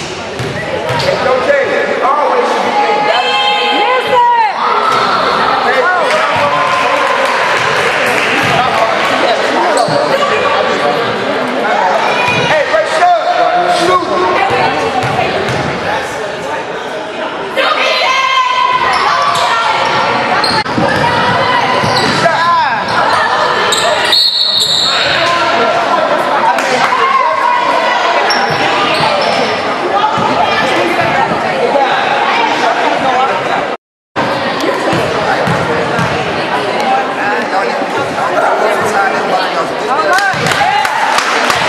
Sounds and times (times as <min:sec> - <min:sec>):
Inside, large room or hall: 0:00.0 - 0:41.6.